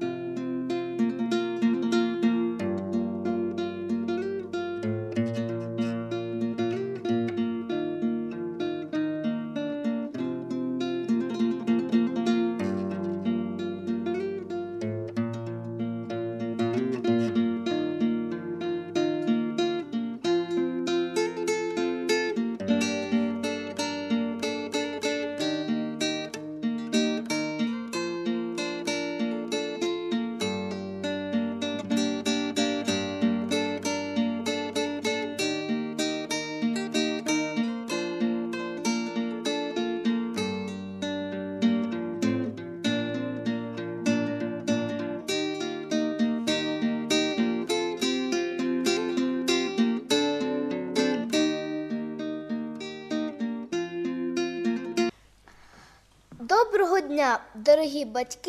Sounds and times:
Acoustic guitar: 0.0 - 58.4.

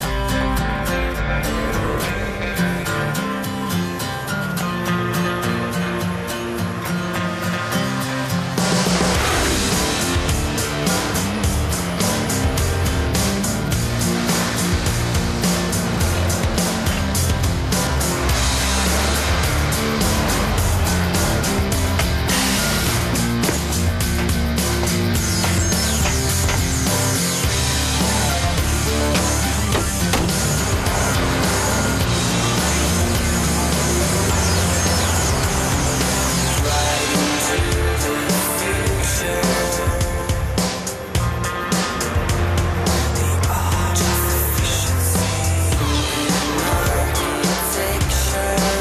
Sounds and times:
Music: 0.0 - 48.8.

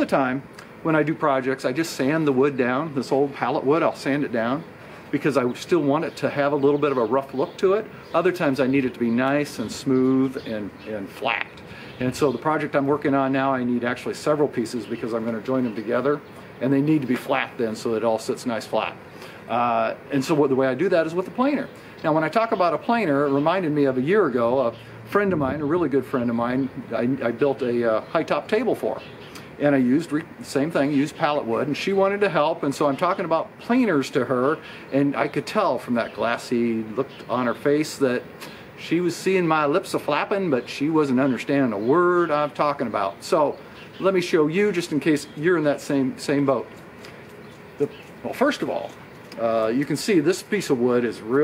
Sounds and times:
Speech: 0.0 - 46.7, 47.8 - 51.4.

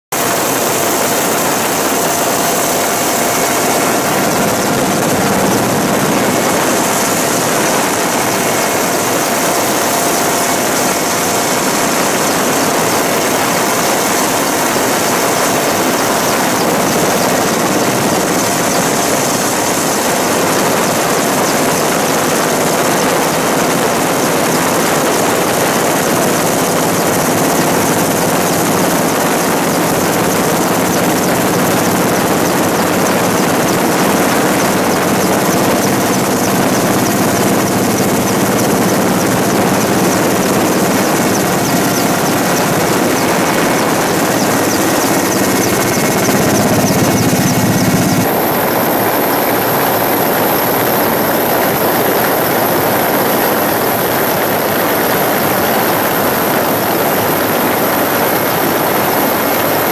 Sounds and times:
Outside, rural or natural: 0.0 - 59.9
Propeller, airscrew: 0.0 - 59.9.

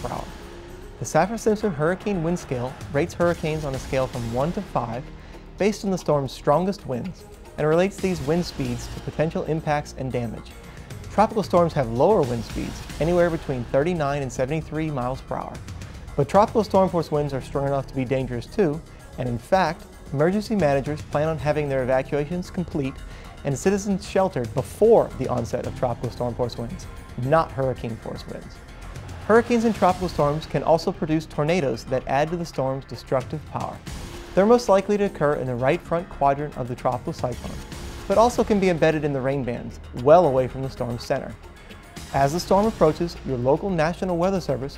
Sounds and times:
Speech: 0.0 - 0.3, 1.0 - 15.6, 16.2 - 28.6, 29.3 - 33.8, 34.4 - 41.4, 42.1 - 44.7
Music: 0.0 - 44.7.

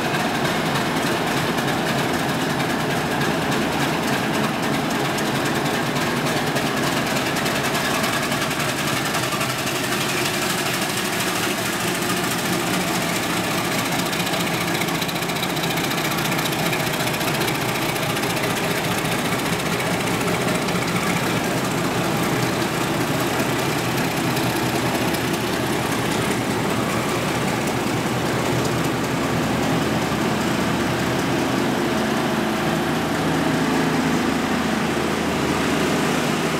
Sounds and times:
Railroad car, train wagon: 0.0 - 36.6
Train: 0.0 - 36.6.

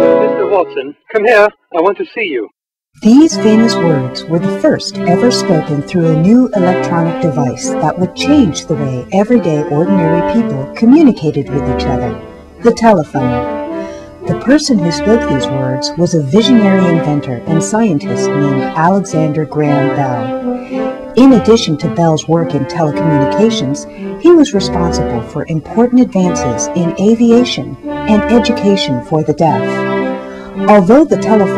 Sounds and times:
Music: 0.0 - 2.4, 3.0 - 31.5
Speech: 0.0 - 13.4, 14.3 - 20.3, 21.2 - 29.8, 30.6 - 31.5.

